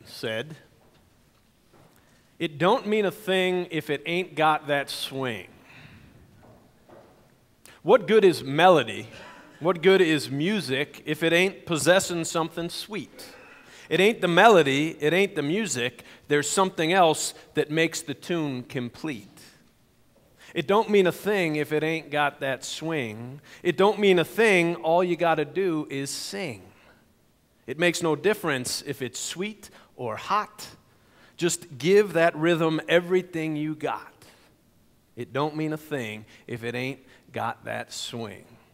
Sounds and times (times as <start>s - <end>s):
Speech: 0.0s - 0.7s, 2.4s - 5.5s, 7.8s - 19.6s, 20.5s - 26.8s, 27.7s - 30.8s, 31.4s - 34.4s, 35.2s - 38.6s.